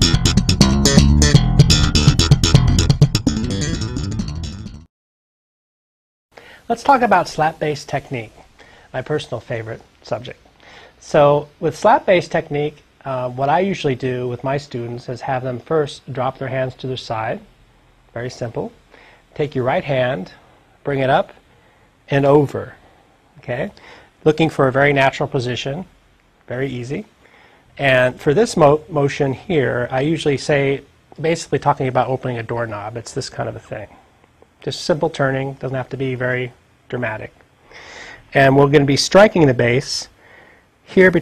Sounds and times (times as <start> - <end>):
Speech: 6.7 - 10.4, 11.0 - 17.5, 18.2 - 18.8, 19.4 - 21.4, 22.1 - 22.8, 23.4 - 25.9, 26.5 - 27.1, 27.8 - 34.0, 34.6 - 37.4, 38.3 - 40.2, 40.9 - 41.2.